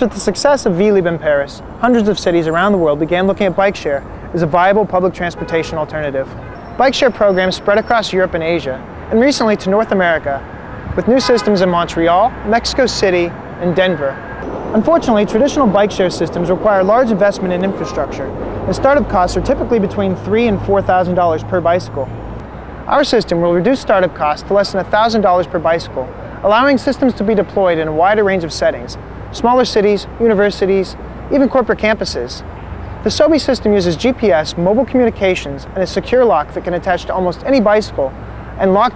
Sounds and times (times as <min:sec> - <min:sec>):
Speech: 0:00.0 - 0:10.4, 0:11.0 - 0:14.2, 0:14.8 - 0:22.2, 0:22.9 - 0:32.4, 0:33.0 - 0:38.9.